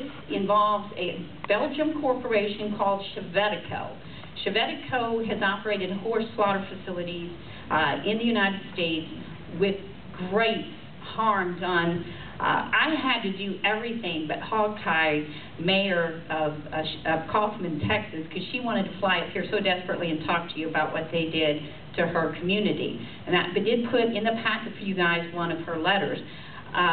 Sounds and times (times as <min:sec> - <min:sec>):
Speech: 0:00.0 - 0:26.9.